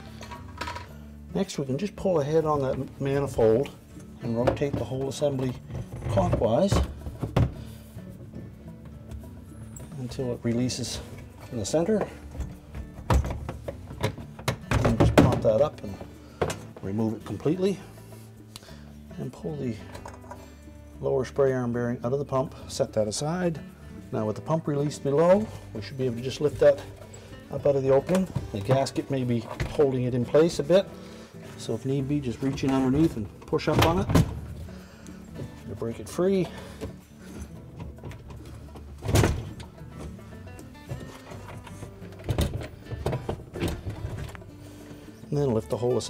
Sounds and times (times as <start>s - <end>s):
Music: 0.0s - 46.1s
Speech: 1.4s - 6.9s, 10.0s - 12.2s, 14.9s - 16.0s, 16.8s - 17.8s, 19.2s - 19.9s, 21.0s - 26.9s, 27.5s - 30.9s, 31.6s - 34.2s, 35.7s - 36.6s, 45.3s - 46.1s.